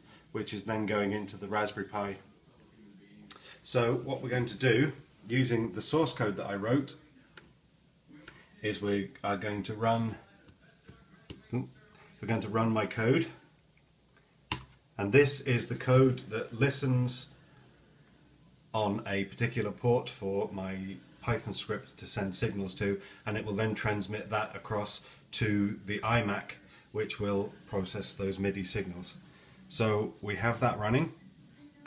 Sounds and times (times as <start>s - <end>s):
Speech: 0.3s - 7.5s, 8.1s - 13.5s, 15.0s - 17.8s, 18.7s - 31.8s.